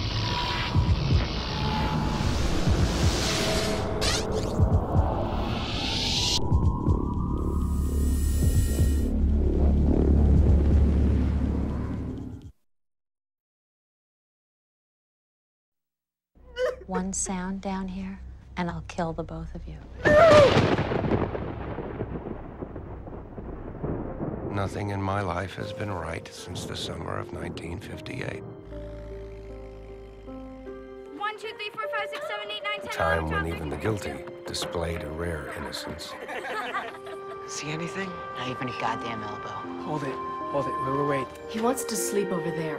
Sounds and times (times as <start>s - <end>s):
Music: 0.0s - 12.5s, 16.8s - 20.0s, 24.0s - 42.7s.